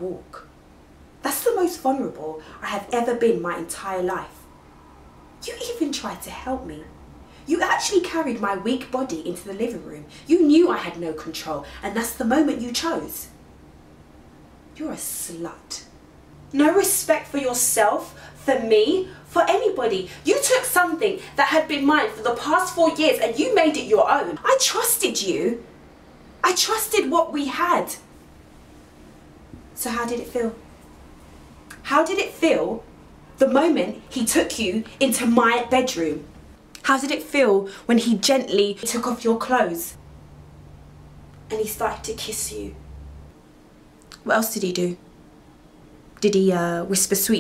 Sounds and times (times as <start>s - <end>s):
Narration, monologue: 0.0s - 47.4s.